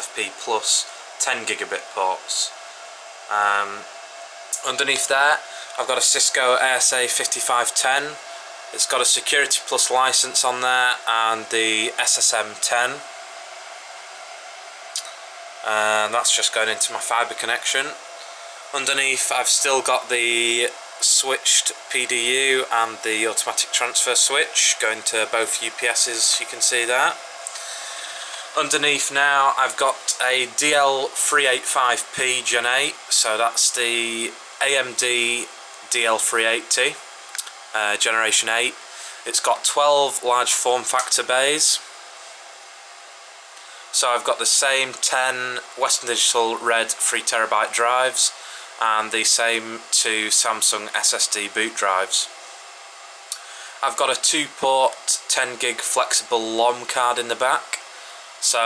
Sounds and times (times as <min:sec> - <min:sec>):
Speech: 0:00.0 - 0:02.6, 0:03.3 - 0:03.9, 0:04.6 - 0:13.1, 0:15.0 - 0:18.0, 0:18.7 - 0:27.2, 0:28.5 - 0:41.9, 0:43.9 - 0:52.3, 0:53.8 - 0:58.6
Inside, small room: 0:00.0 - 0:58.6.